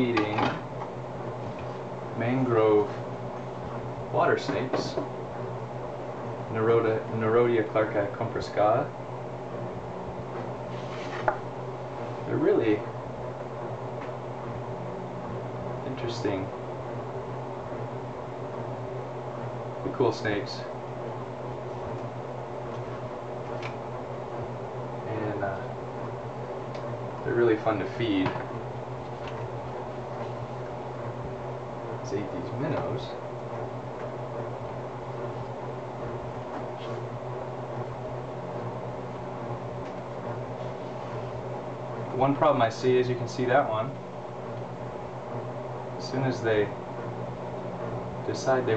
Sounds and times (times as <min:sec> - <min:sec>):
Speech: 0:00.0 - 0:00.6, 0:02.1 - 0:03.0, 0:04.1 - 0:05.1, 0:06.5 - 0:09.0, 0:12.2 - 0:13.0, 0:15.8 - 0:16.6, 0:19.8 - 0:20.8, 0:25.0 - 0:25.8, 0:27.2 - 0:28.5, 0:32.0 - 0:33.3, 0:42.1 - 0:44.0, 0:46.0 - 0:46.8, 0:48.2 - 0:48.7.